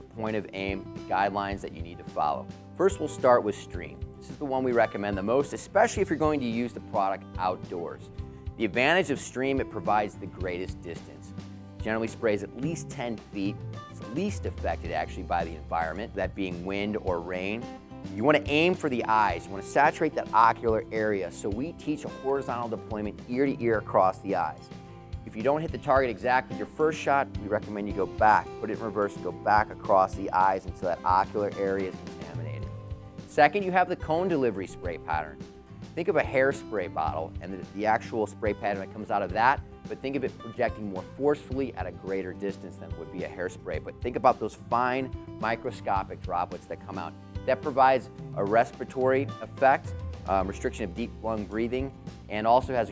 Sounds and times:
Speech: 0.0s - 24.7s, 25.3s - 32.7s, 33.3s - 35.4s, 36.0s - 52.9s
Music: 0.0s - 52.9s.

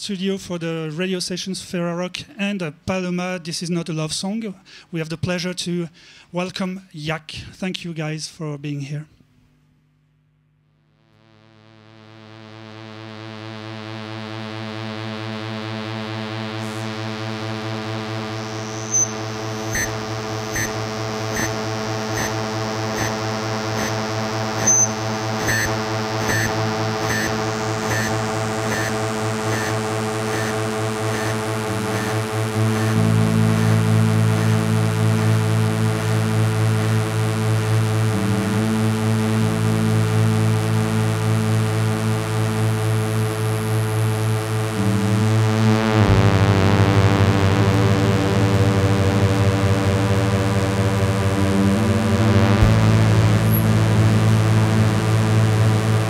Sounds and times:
Speech: 0.0s - 9.2s.

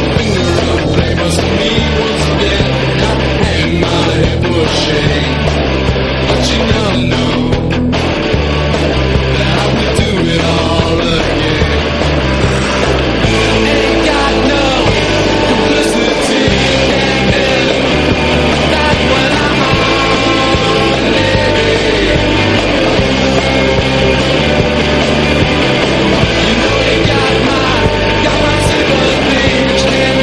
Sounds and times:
Punk rock: 0.0s - 30.2s.

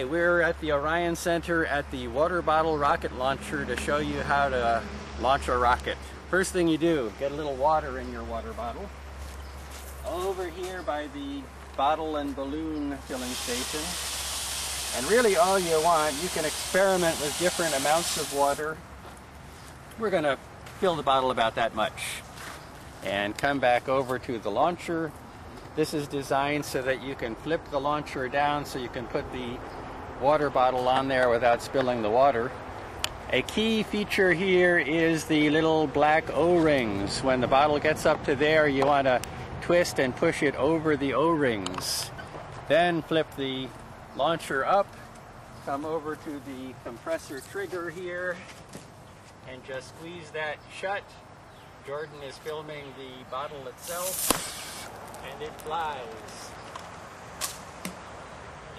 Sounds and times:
Speech: 0.0s - 8.9s, 10.0s - 14.0s, 15.0s - 18.8s, 20.0s - 22.3s, 23.0s - 25.2s, 25.8s - 29.6s, 30.2s - 32.6s, 33.3s - 45.0s, 45.7s - 48.5s, 49.4s - 51.2s, 51.8s - 54.2s, 55.2s - 56.6s.

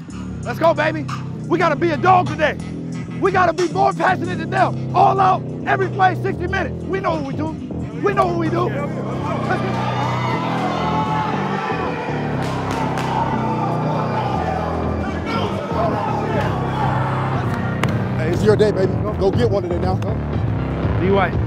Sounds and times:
Music: 0.0s - 21.4s
Crowd: 7.8s - 21.4s
Applause: 12.4s - 13.2s.

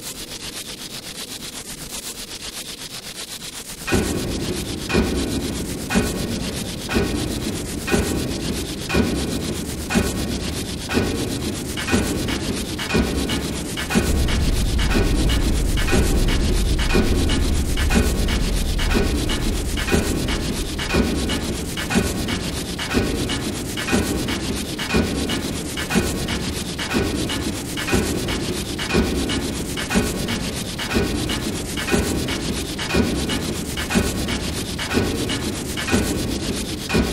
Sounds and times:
Music: 3.9s - 37.1s.

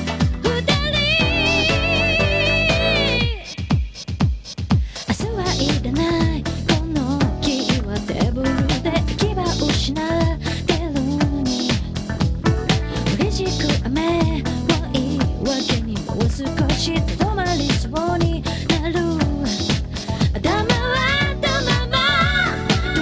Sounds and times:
Music: 0.0s - 23.0s.

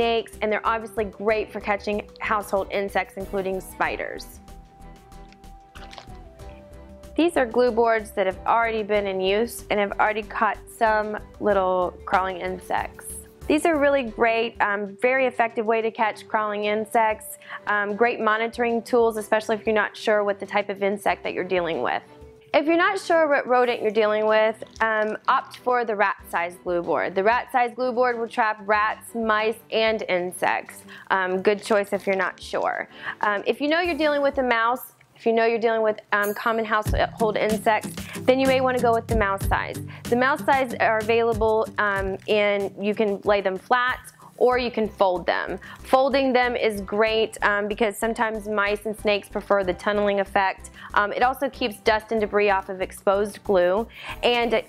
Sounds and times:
Speech: 0.0s - 4.4s, 7.2s - 22.0s, 22.6s - 54.6s
Music: 0.0s - 54.6s.

